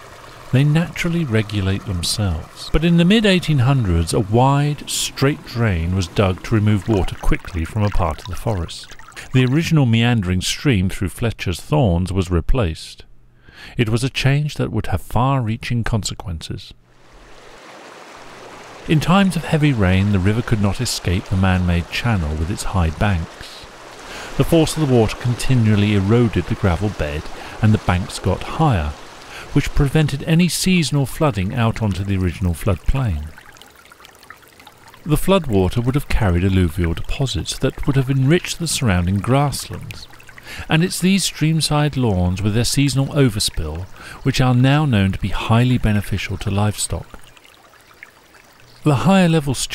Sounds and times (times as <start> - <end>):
Stream: 0.0 - 10.6, 16.9 - 49.7
Speech: 0.5 - 13.1, 13.7 - 16.8, 18.9 - 23.7, 24.4 - 33.4, 35.1 - 47.2, 48.9 - 49.7.